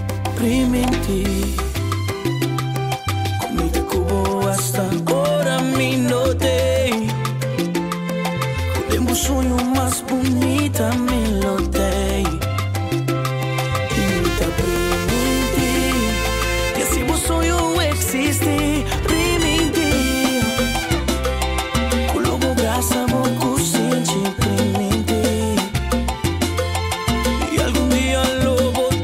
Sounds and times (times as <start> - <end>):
Music: 0.0 - 29.0.